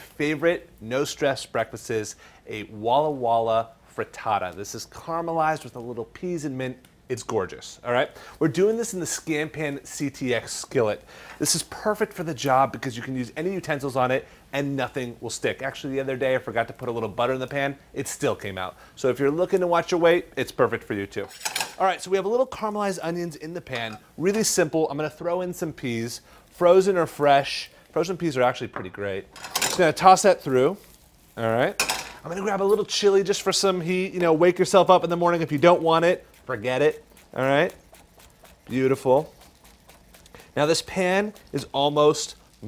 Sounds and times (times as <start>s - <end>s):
Speech: 0.2s - 30.8s, 31.4s - 37.8s, 38.7s - 39.3s, 40.6s - 42.6s.